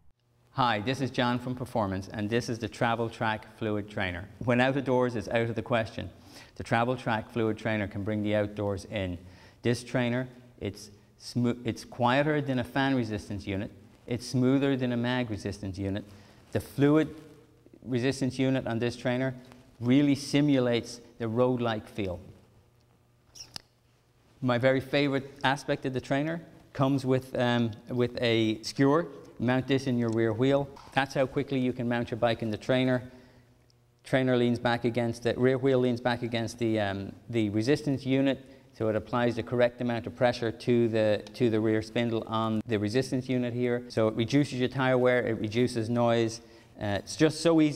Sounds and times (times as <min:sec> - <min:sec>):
Speech: 0:00.6 - 0:22.4, 0:24.4 - 0:33.1, 0:34.0 - 0:47.7.